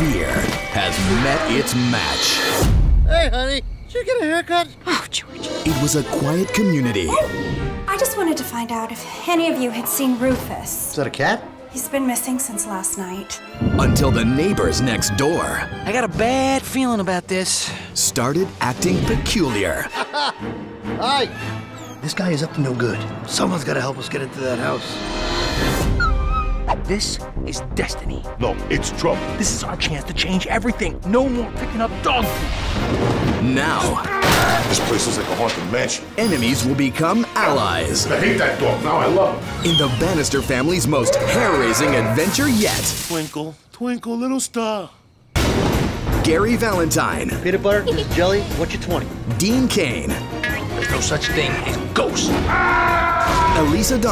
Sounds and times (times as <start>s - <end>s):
Music: 0.0s - 43.2s, 45.4s - 54.1s.